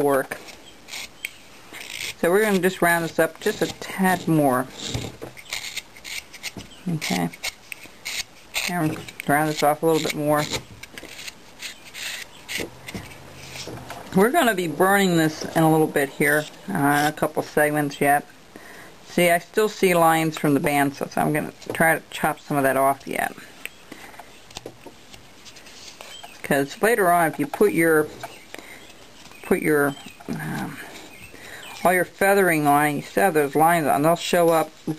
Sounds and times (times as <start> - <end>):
Inside, small room: 0.0 - 34.9
Speech: 6.9 - 7.4, 8.7 - 10.6, 19.1 - 23.5, 26.5 - 28.1, 29.5 - 30.9, 31.8 - 34.9.